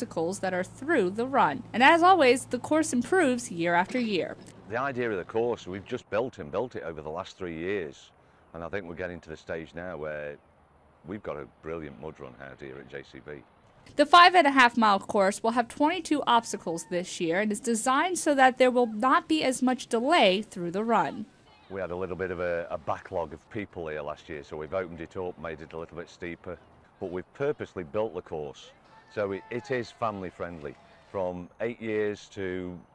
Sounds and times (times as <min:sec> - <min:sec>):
Speech: 0:00.0 - 0:10.4, 0:11.1 - 0:13.4, 0:14.0 - 0:32.8.